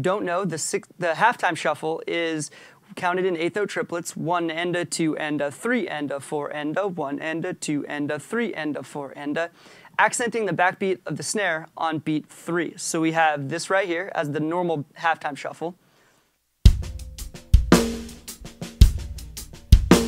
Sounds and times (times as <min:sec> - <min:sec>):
Speech: 0:00.0 - 0:15.8.